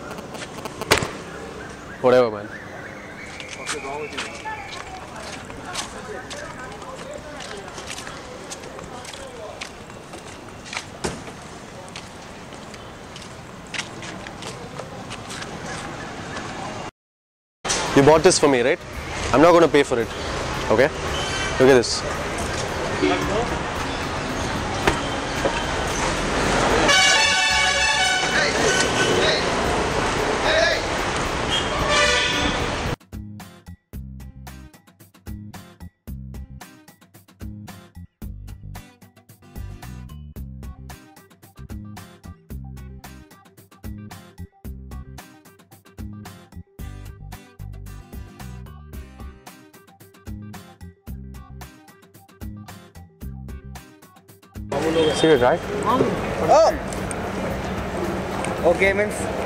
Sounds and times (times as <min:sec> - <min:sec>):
Speech: 0:02.0 - 0:02.6, 0:03.6 - 0:09.8, 0:17.9 - 0:20.1.